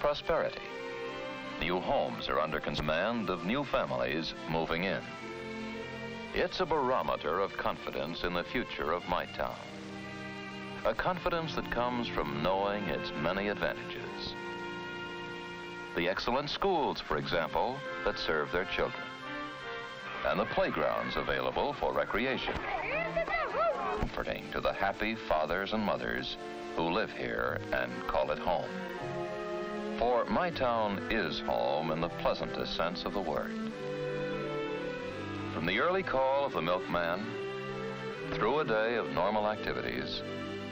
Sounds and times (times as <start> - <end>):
Speech: 0.0 - 0.6, 1.6 - 5.0, 6.4 - 9.7, 10.8 - 14.4, 16.0 - 19.0, 20.2 - 28.7, 30.0 - 33.5, 35.6 - 37.4, 38.3 - 40.2
Music: 0.0 - 40.7.